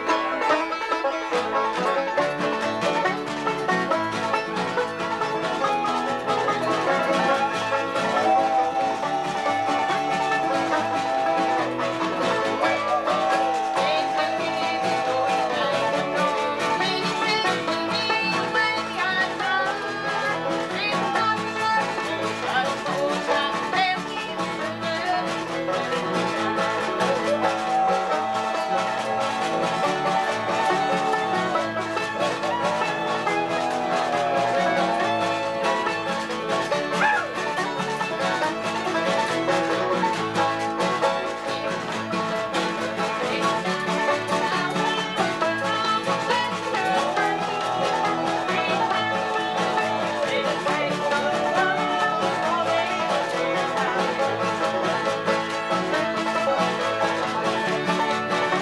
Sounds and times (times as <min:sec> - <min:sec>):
Banjo: 0:00.0 - 0:58.6
Bluegrass: 0:00.0 - 0:58.6
Bowed string instrument: 0:00.0 - 0:58.6
Guitar: 0:00.0 - 0:58.6.